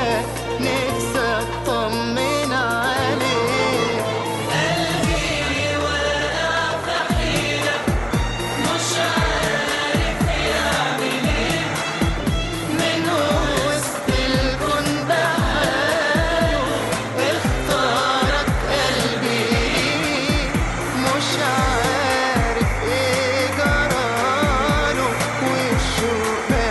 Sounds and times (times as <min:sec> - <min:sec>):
Music: 0:00.0 - 0:26.7.